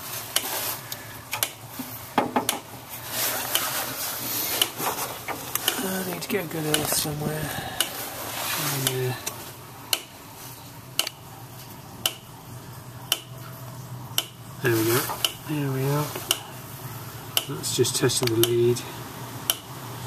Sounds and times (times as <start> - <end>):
Speech: 5.7 - 7.8, 8.6 - 9.3, 14.6 - 16.2, 17.5 - 19.0.